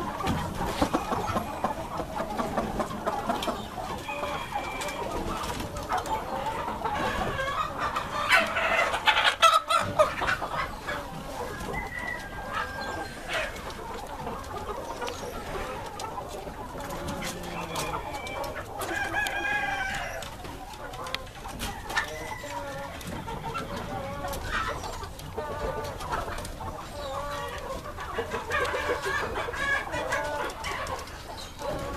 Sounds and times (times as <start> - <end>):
Cluck: 0.0 - 31.9
Crowing, cock-a-doodle-doo: 4.0 - 5.0, 11.7 - 13.2, 17.8 - 20.2.